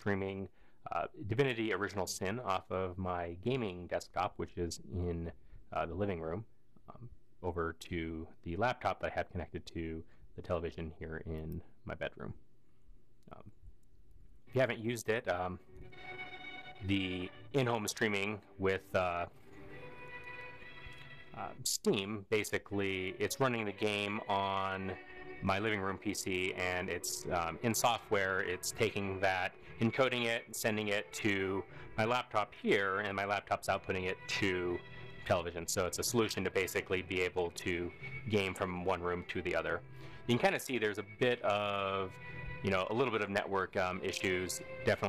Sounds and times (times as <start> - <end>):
Music: 0.0 - 6.4, 14.5 - 45.0
Speech: 0.0 - 12.4, 13.3 - 13.6, 14.5 - 15.6, 16.8 - 19.3, 21.3 - 45.0.